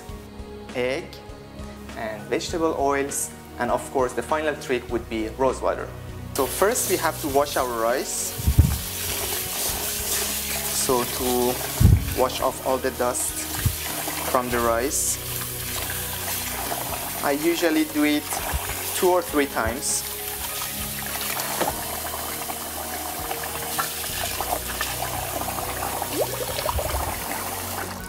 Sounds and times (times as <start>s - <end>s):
Music: 0.0s - 28.0s
Speech: 0.7s - 1.2s, 2.0s - 8.4s, 10.8s - 13.5s, 14.3s - 15.2s, 17.2s - 20.0s
Sink (filling or washing): 6.4s - 28.0s
Water tap, faucet: 6.4s - 28.0s.